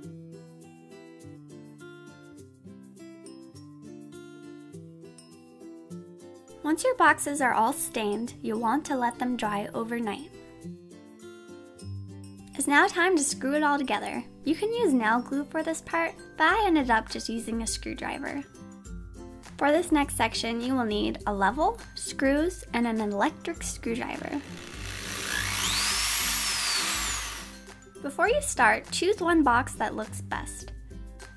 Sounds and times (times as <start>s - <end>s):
Music: 0.0s - 31.3s
Speech: 6.7s - 10.3s, 12.6s - 18.5s, 19.6s - 24.4s, 28.0s - 30.7s
Drill: 24.2s - 27.8s.